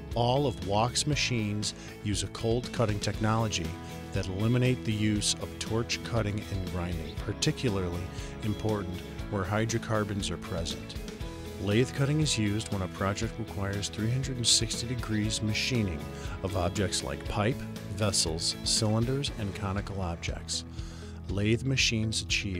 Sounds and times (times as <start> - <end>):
Speech: 0.0 - 11.0, 11.6 - 20.7, 21.3 - 22.5
Music: 0.0 - 22.5.